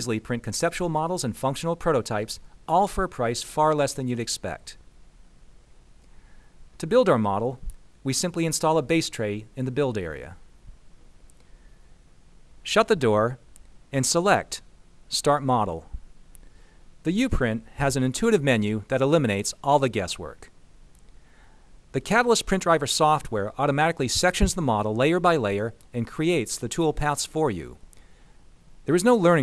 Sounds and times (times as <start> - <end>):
Speech: 0.0 - 4.8, 6.8 - 10.4, 12.6 - 16.0, 17.1 - 20.5, 21.9 - 27.8, 28.9 - 29.4.